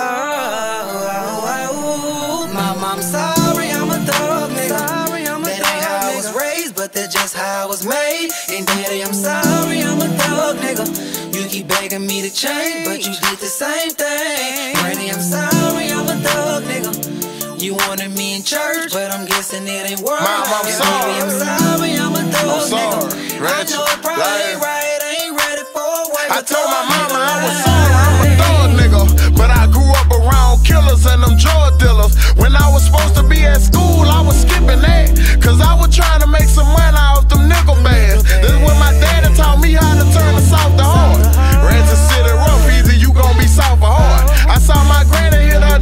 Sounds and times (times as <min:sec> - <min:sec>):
Music: 0:00.0 - 0:45.8.